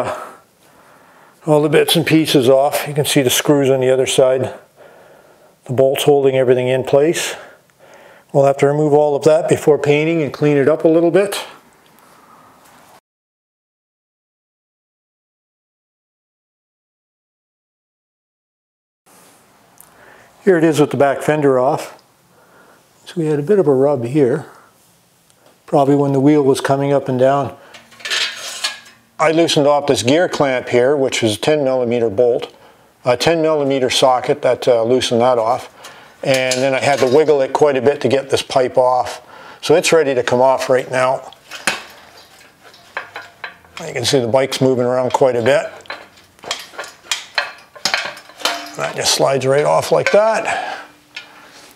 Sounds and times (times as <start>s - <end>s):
Speech: 1.4s - 4.7s, 5.6s - 7.5s, 8.3s - 11.6s, 20.4s - 22.0s, 23.0s - 24.6s, 25.7s - 27.6s, 29.2s - 41.4s, 43.8s - 45.8s, 48.7s - 50.8s.